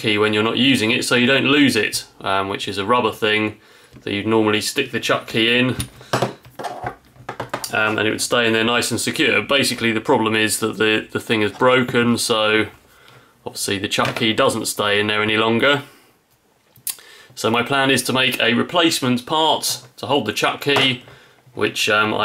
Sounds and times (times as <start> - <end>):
Speech: 0.0 - 5.9, 7.7 - 12.8, 13.4 - 16.0, 17.4 - 21.0, 21.6 - 22.2.